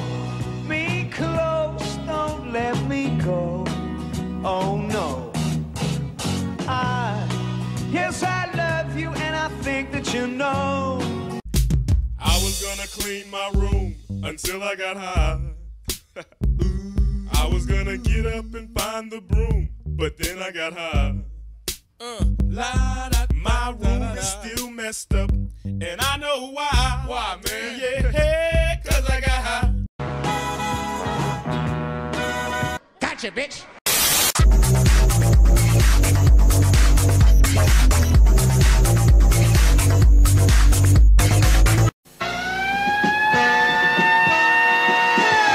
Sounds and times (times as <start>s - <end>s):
Music: 0.0s - 33.0s, 34.4s - 42.0s, 43.0s - 45.5s.